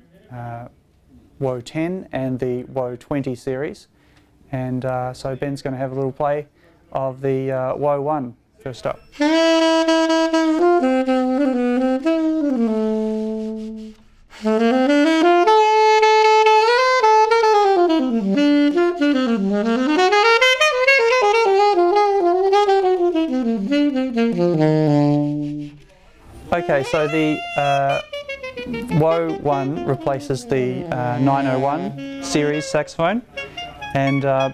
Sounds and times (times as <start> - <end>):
Speech: 0.0 - 0.8, 1.4 - 3.9, 4.5 - 9.1, 25.8 - 28.0, 28.9 - 33.3, 34.0 - 34.5
Music: 9.2 - 25.8, 26.6 - 34.5.